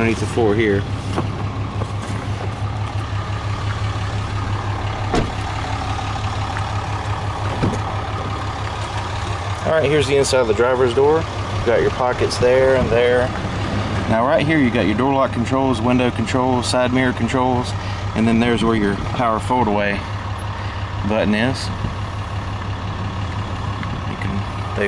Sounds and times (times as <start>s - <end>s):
Speech: 0.0s - 0.9s, 9.6s - 13.3s, 14.1s - 20.0s, 21.0s - 21.8s, 24.1s - 24.8s
Car: 0.0s - 24.8s
Outside, urban or manmade: 0.0s - 24.8s.